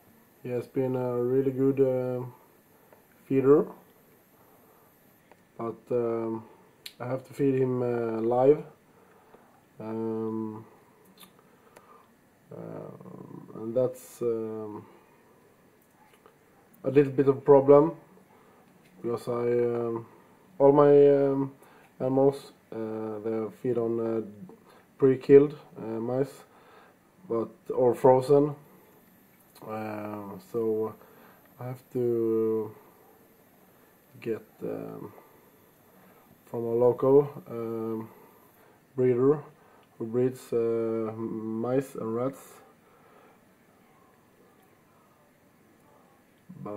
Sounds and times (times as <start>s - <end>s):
Speech: 0.4s - 2.5s, 3.2s - 3.8s, 5.6s - 8.8s, 9.8s - 10.8s, 12.5s - 14.9s, 16.8s - 18.1s, 19.0s - 26.5s, 27.3s - 28.7s, 29.6s - 31.0s, 31.6s - 32.8s, 34.2s - 35.2s, 36.5s - 38.2s, 39.0s - 42.7s, 46.5s - 46.7s.